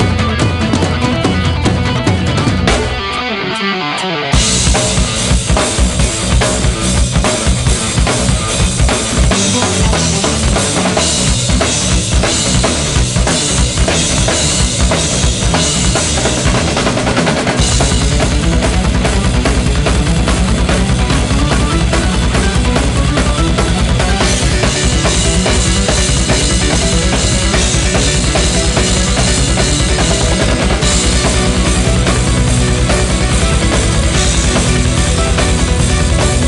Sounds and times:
Drum: 0.0s - 3.6s, 4.3s - 36.4s
Drum kit: 0.0s - 36.4s.

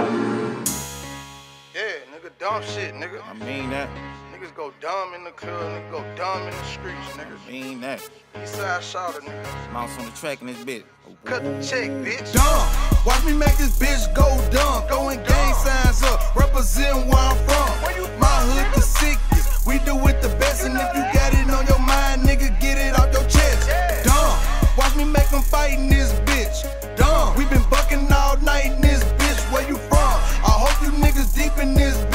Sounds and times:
Music: 0.0s - 32.1s
Speech: 1.9s - 4.6s, 7.0s - 10.9s.

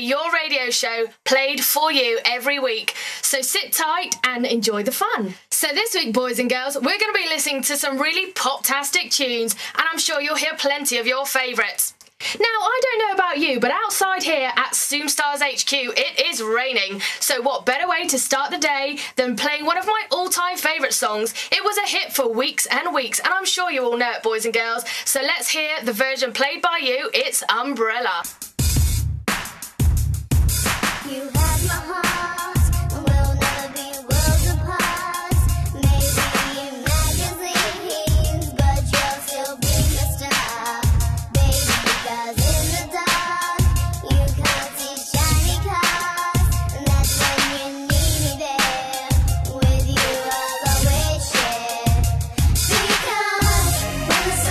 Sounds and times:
Speech: 0.0s - 28.3s.

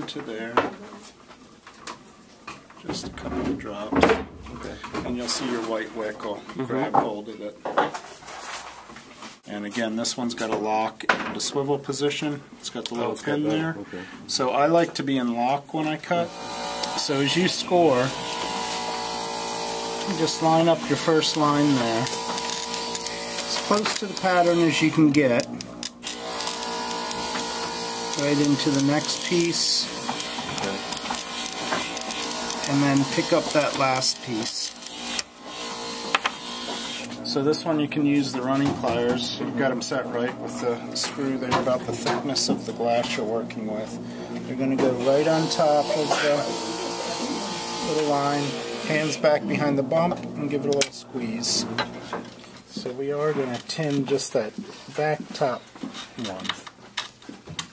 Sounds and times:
Speech: 0.0s - 1.0s, 2.8s - 7.7s, 9.4s - 16.3s, 17.0s - 18.2s, 20.1s - 22.2s, 23.5s - 25.5s, 28.2s - 29.9s, 30.6s - 30.9s, 32.7s - 34.8s, 37.2s - 51.8s, 52.7s - 55.6s, 56.2s - 56.6s.

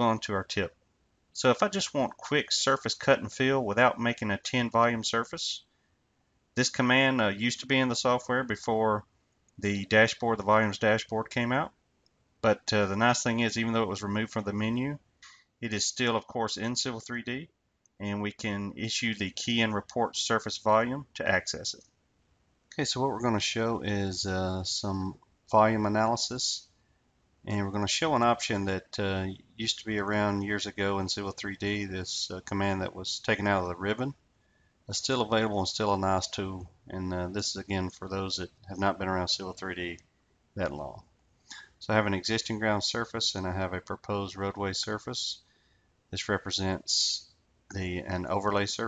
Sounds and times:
Speech: 0.0s - 0.7s, 1.4s - 5.7s, 6.6s - 9.0s, 9.6s - 11.7s, 12.4s - 15.0s, 15.6s - 21.8s, 22.8s - 26.7s, 27.5s - 34.2s, 34.9s - 40.0s, 40.6s - 41.0s, 41.6s - 45.4s, 46.2s - 48.8s.

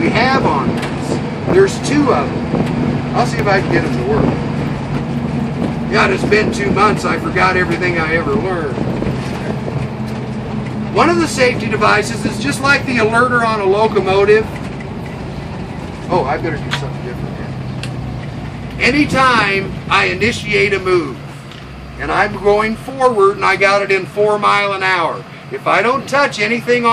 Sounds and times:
Speech: 0.0s - 2.3s, 3.2s - 4.4s, 5.9s - 8.8s, 11.0s - 14.6s, 16.1s - 17.5s, 18.8s - 21.2s, 22.0s - 26.9s
Bus: 0.0s - 26.9s.

